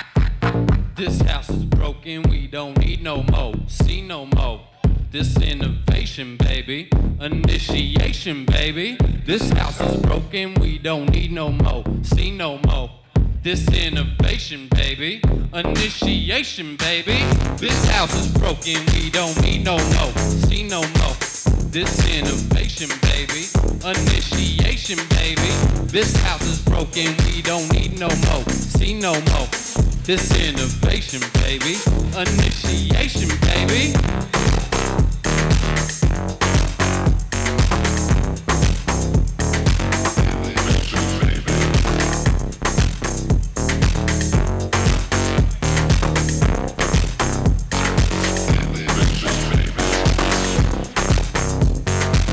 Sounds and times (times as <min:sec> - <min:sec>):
Techno: 0:02.8 - 0:52.3.